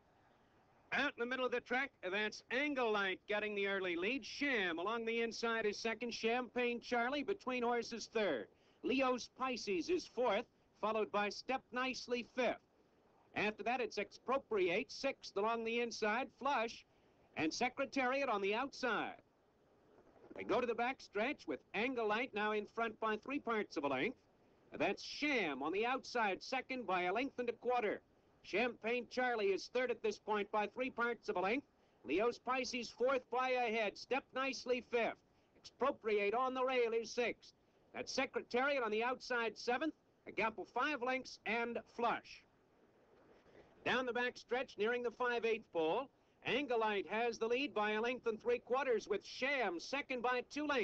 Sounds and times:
Speech: 0:00.9 - 0:12.7, 0:13.4 - 0:19.2, 0:20.4 - 0:24.2, 0:24.8 - 0:42.5, 0:43.8 - 0:50.8.

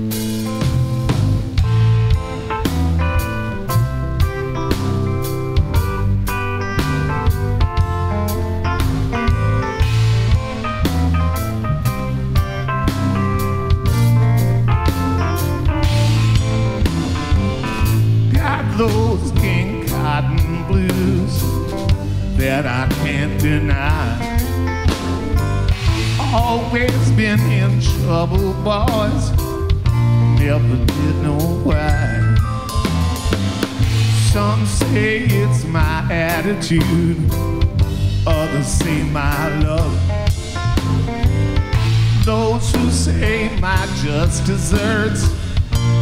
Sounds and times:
Blues: 0:00.0 - 0:46.0.

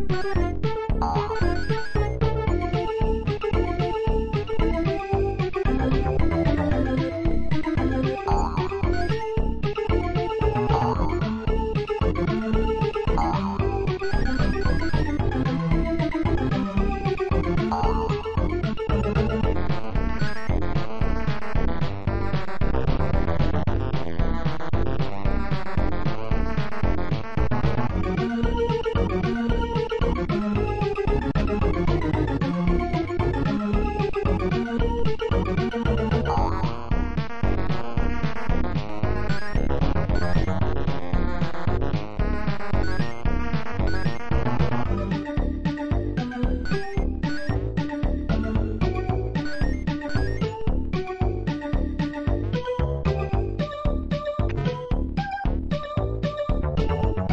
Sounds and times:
Music: 0:00.0 - 0:57.3.

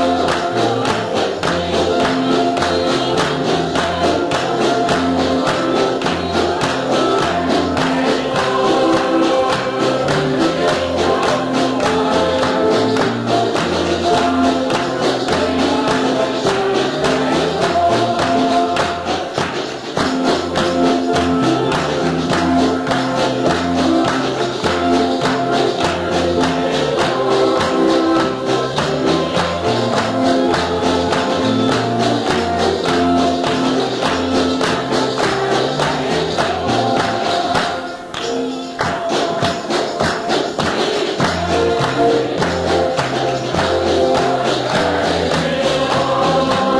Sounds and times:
Music: 0:00.0 - 0:46.7.

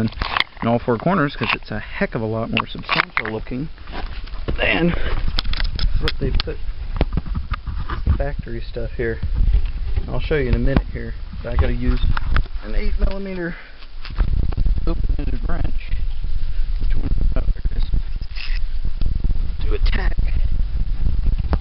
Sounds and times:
Outside, urban or manmade: 0:00.0 - 0:21.6
Speech: 0:10.1 - 0:13.6.

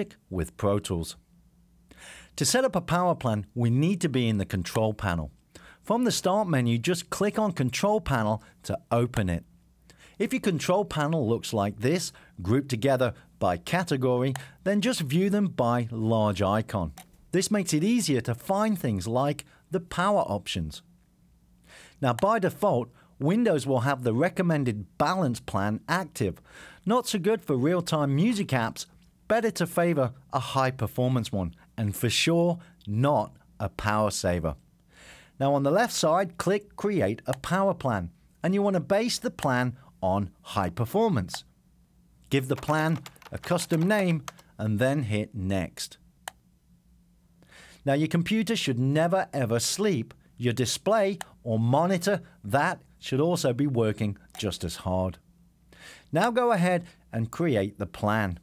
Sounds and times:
Speech: 0:00.0 - 0:01.2, 0:02.4 - 0:09.5, 0:10.2 - 0:20.9, 0:22.0 - 0:34.6, 0:35.4 - 0:41.5, 0:42.3 - 0:46.0, 0:47.8 - 0:55.2, 0:56.1 - 0:58.4.

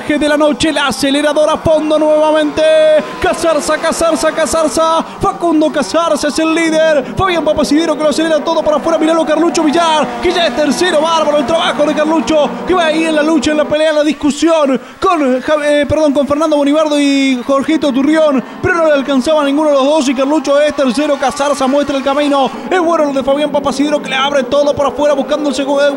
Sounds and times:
Speech: 0:00.0 - 0:25.9
Vehicle: 0:00.0 - 0:25.9.

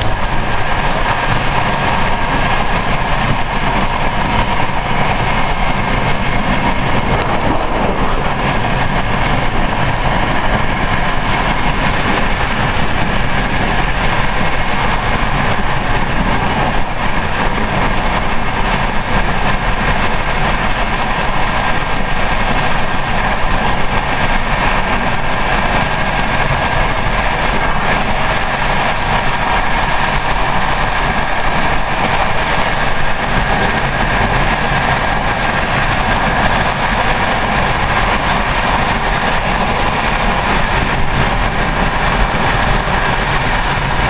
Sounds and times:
Railroad car, train wagon: 0:00.0 - 0:44.0
Train: 0:00.0 - 0:44.0.

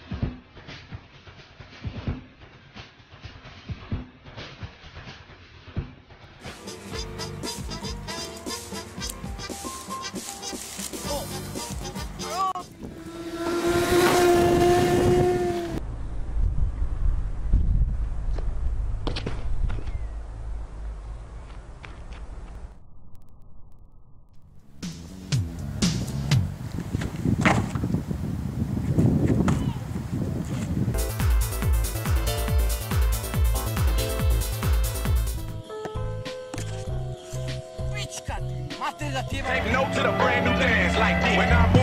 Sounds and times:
Music: 0:00.0 - 0:12.8, 0:24.7 - 0:26.6, 0:31.0 - 0:41.8
Outside, rural or natural: 0:00.0 - 0:41.8.

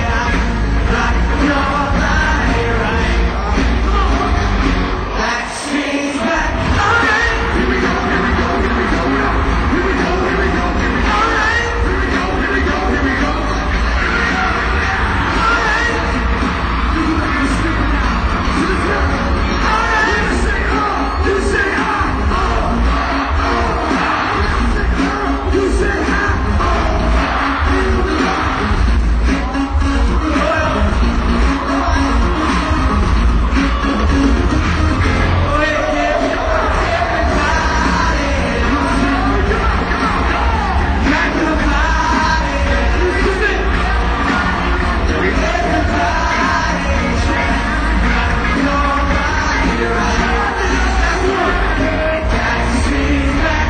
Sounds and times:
Music: 0:00.0 - 0:53.6
Singing: 0:00.0 - 0:53.6.

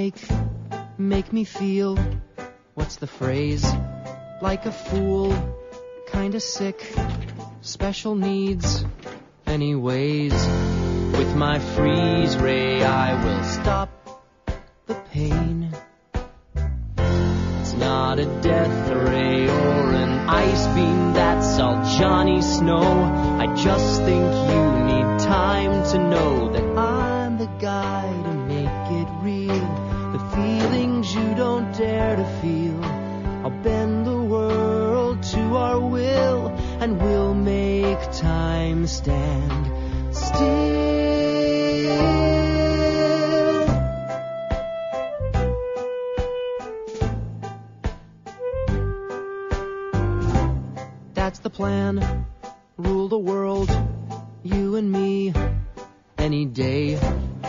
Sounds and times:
Music: 0:00.0 - 0:57.4.

